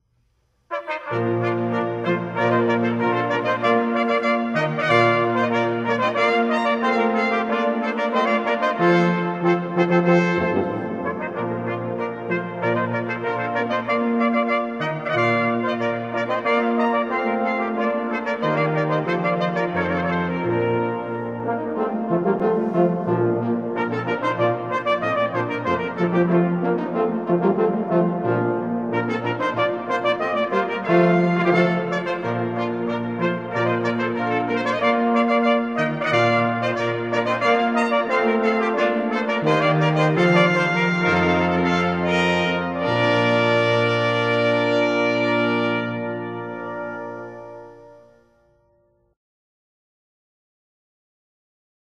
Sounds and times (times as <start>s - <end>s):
Trumpet: 0.6s - 49.2s
Trombone: 0.7s - 48.8s.